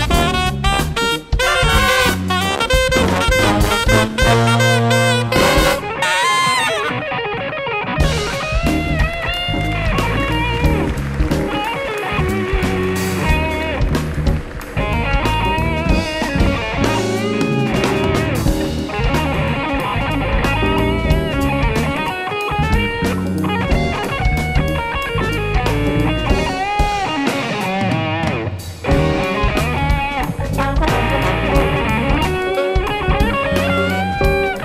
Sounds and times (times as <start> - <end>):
Drum: 0.0 - 6.9, 8.0 - 34.6
Brass instrument: 0.0 - 7.2, 8.0 - 27.6, 28.8 - 34.6
Electric guitar: 0.0 - 34.6.